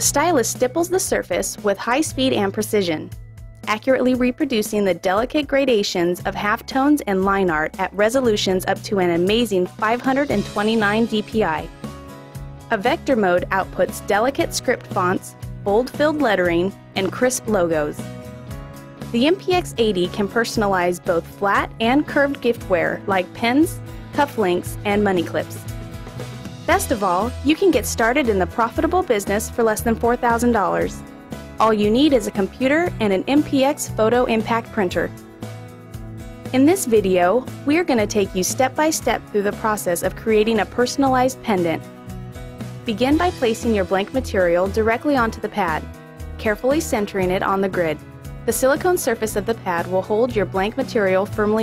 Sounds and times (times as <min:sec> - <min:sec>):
Speech: 0:00.0 - 0:03.1, 0:03.7 - 0:11.7, 0:12.7 - 0:18.0, 0:19.1 - 0:25.6, 0:26.7 - 0:31.0, 0:31.6 - 0:35.2, 0:36.6 - 0:41.8, 0:42.9 - 0:45.8, 0:46.4 - 0:51.6
Music: 0:00.0 - 0:51.6.